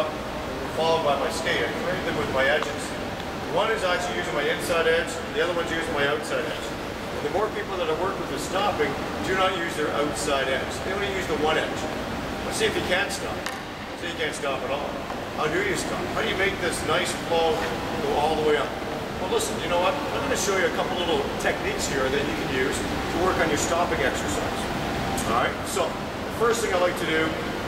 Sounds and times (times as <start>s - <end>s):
Speech: 0.0s - 13.4s, 14.0s - 27.4s
Inside, large room or hall: 0.0s - 27.6s.